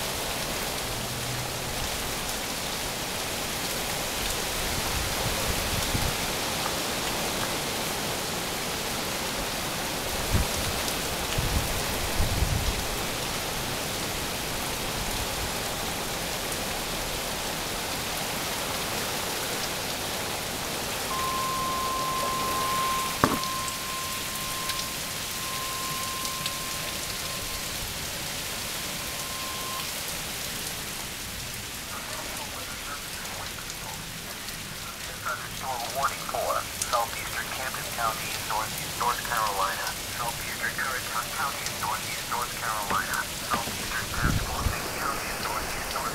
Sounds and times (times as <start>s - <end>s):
Rain: 0.0s - 46.1s.